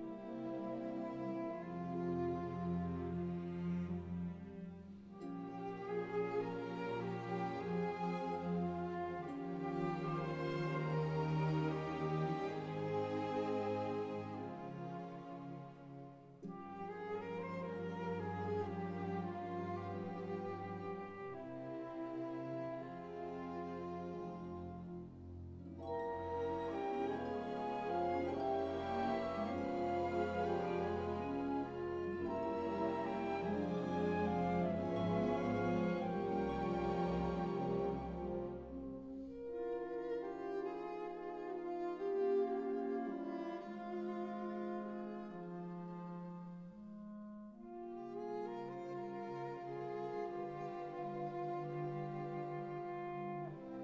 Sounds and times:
Cello: 0:00.0 - 0:53.8.

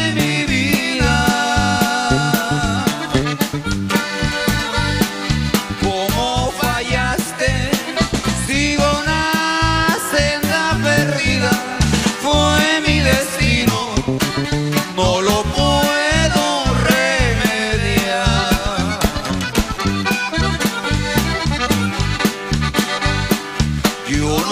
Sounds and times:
Music: 0:00.0 - 0:24.5.

